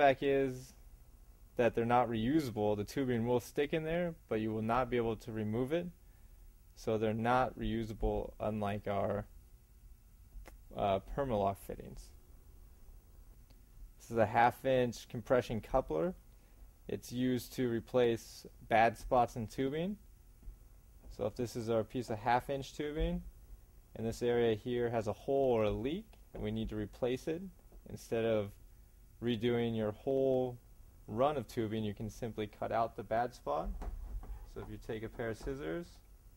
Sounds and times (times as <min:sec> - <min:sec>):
Speech: 0:00.0 - 0:00.8, 0:01.6 - 0:06.0, 0:06.8 - 0:09.3, 0:10.7 - 0:12.2, 0:14.0 - 0:16.2, 0:16.9 - 0:20.0, 0:21.1 - 0:23.3, 0:24.0 - 0:28.6, 0:29.2 - 0:33.8, 0:34.5 - 0:36.0.